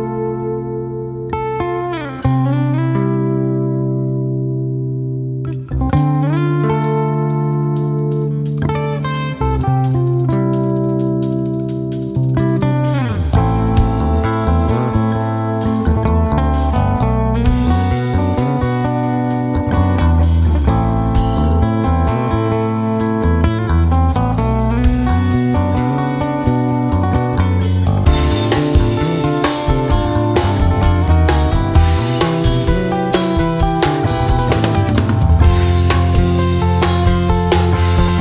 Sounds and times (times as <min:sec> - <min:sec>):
Music: 0:00.0 - 0:38.2.